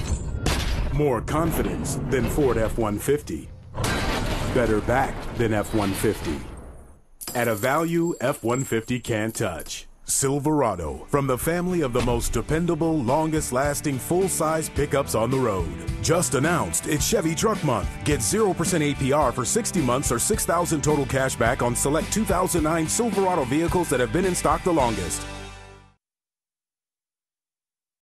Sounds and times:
Speech: 0:00.9 - 0:03.5, 0:04.5 - 0:06.5, 0:07.3 - 0:25.2
Music: 0:11.8 - 0:26.0.

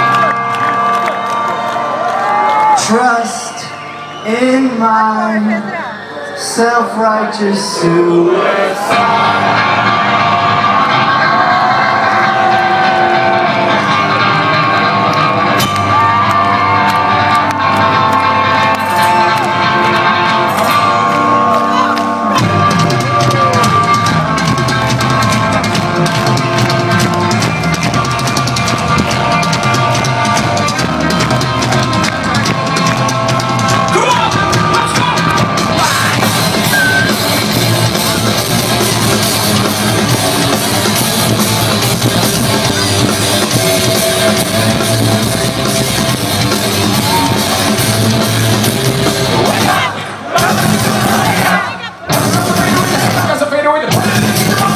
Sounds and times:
Music: 0:00.0 - 0:06.1, 0:06.8 - 0:54.7.

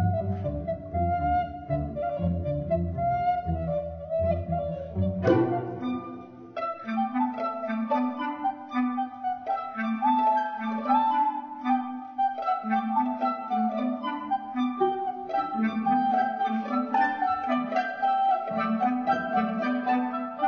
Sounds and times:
Classical music: 0:00.0 - 0:20.4
Inside, large room or hall: 0:00.0 - 0:20.4
Orchestra: 0:00.0 - 0:20.4.

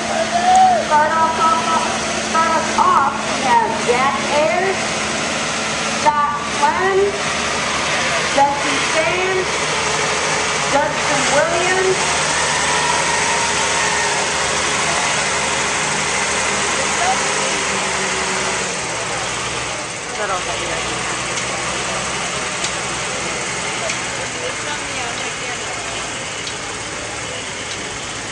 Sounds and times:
Outside, rural or natural: 0:00.0 - 0:28.3
Truck: 0:00.0 - 0:28.3.

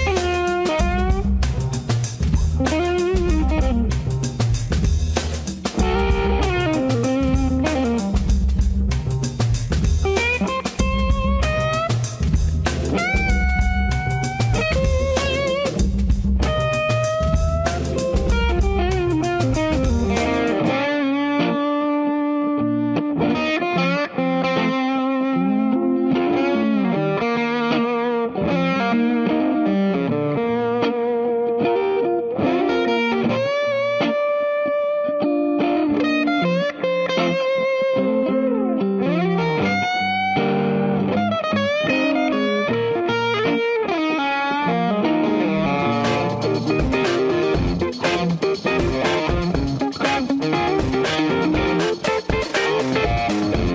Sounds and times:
Guitar: 0:00.0 - 0:53.7.

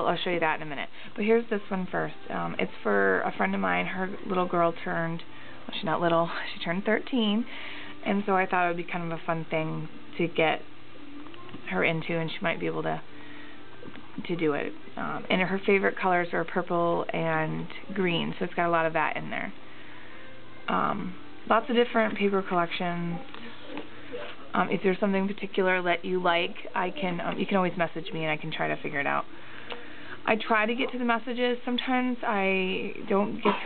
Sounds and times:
Speech: 0:00.0 - 0:10.6, 0:11.4 - 0:13.0, 0:14.2 - 0:19.6, 0:20.7 - 0:29.3, 0:30.2 - 0:33.6.

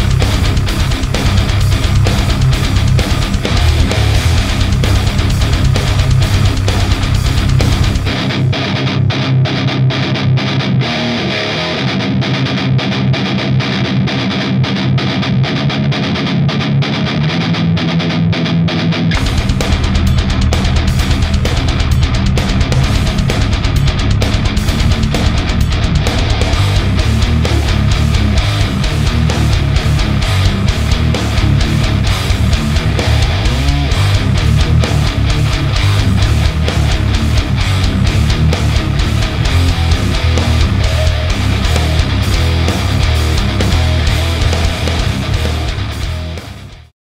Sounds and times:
Distortion: 0:00.0 - 0:46.9
Music: 0:00.0 - 0:46.9.

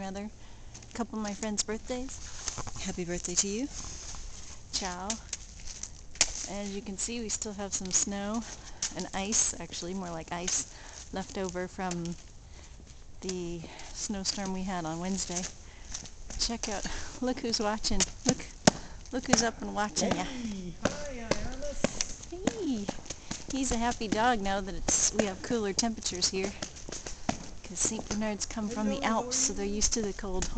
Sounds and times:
Speech: 0:06.5 - 0:08.4, 0:19.2 - 0:26.6, 0:27.7 - 0:30.5.

